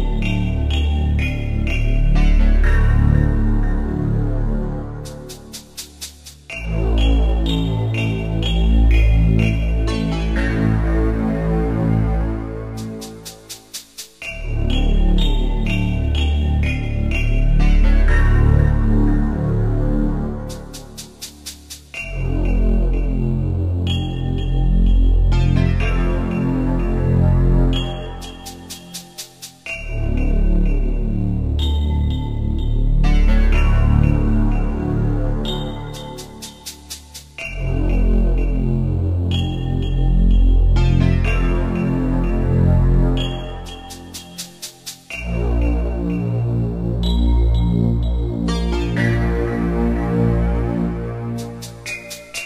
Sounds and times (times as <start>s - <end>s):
Video game music: 0.0s - 52.4s.